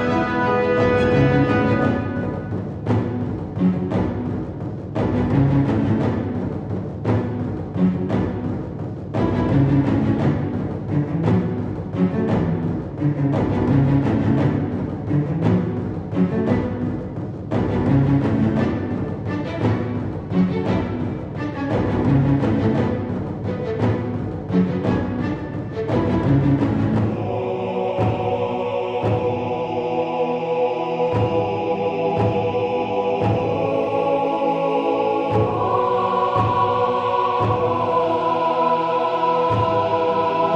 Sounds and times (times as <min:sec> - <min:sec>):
Music: 0:00.0 - 0:40.5.